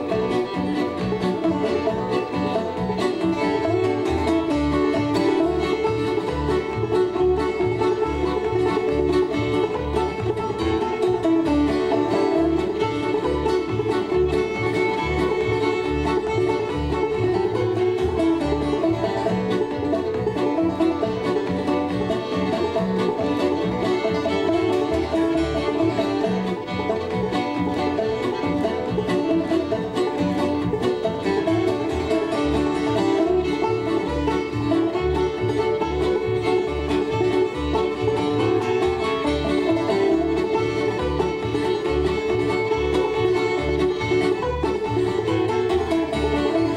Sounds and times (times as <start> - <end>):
Banjo: 0.0 - 46.7
Violin, fiddle: 0.0 - 46.7.